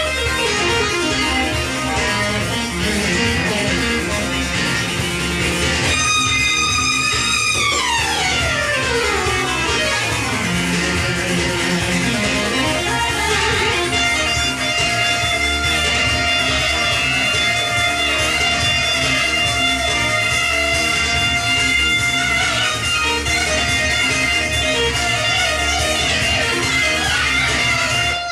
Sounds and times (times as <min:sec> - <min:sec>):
Music: 0:00.0 - 0:28.3.